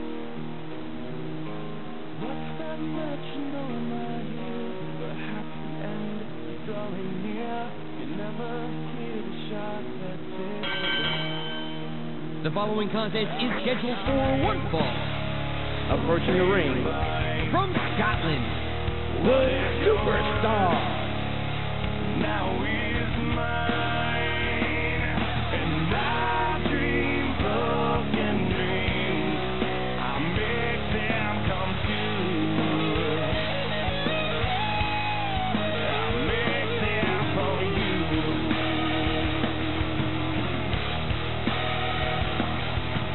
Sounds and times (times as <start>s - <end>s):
Music: 0.0s - 43.1s
Speech: 12.4s - 15.0s, 15.9s - 18.5s, 19.8s - 20.9s.